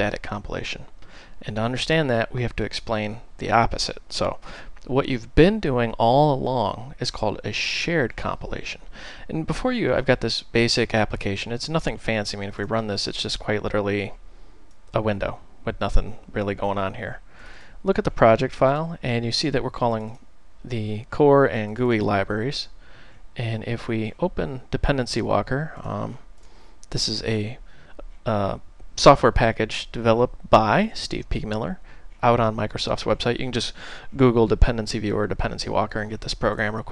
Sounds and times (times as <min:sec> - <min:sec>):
Speech: 0:00.0 - 0:14.2, 0:14.9 - 0:17.2, 0:17.8 - 0:22.8, 0:23.4 - 0:26.3, 0:26.9 - 0:36.9.